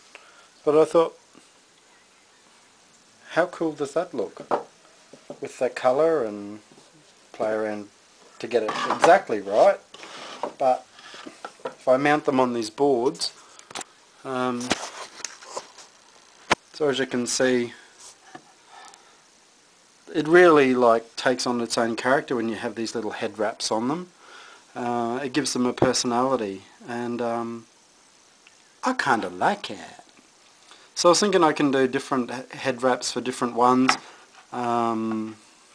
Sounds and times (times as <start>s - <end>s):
Inside, small room: 0.0s - 35.7s
Speech: 0.6s - 1.2s, 3.3s - 4.5s, 5.4s - 6.7s, 7.3s - 9.9s, 10.6s - 10.9s, 11.8s - 13.4s, 14.2s - 14.8s, 16.8s - 17.8s, 20.1s - 24.1s, 24.8s - 27.7s, 28.8s - 30.1s, 31.0s - 35.4s.